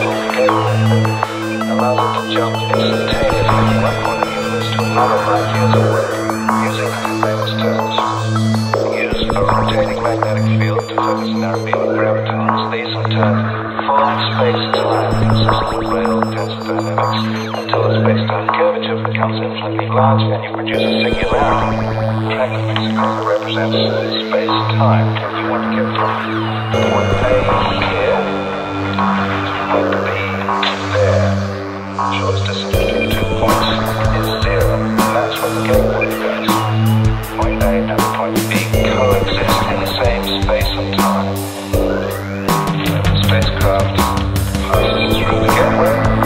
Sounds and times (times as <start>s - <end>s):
Music: 0.0s - 46.2s
Speech: 0.0s - 46.2s.